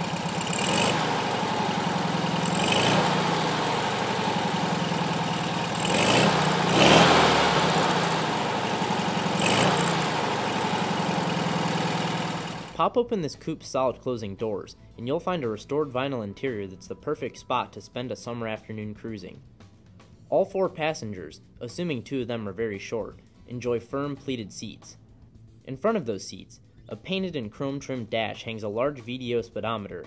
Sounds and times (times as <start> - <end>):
Car: 0.0 - 12.8
Outside, urban or manmade: 0.0 - 13.0.